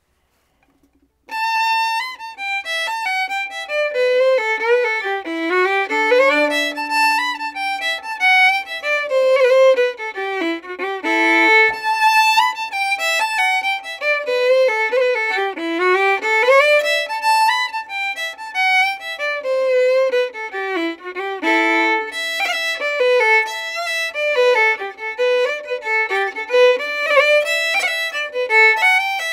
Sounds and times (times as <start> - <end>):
Violin, fiddle: 1.3 - 29.3.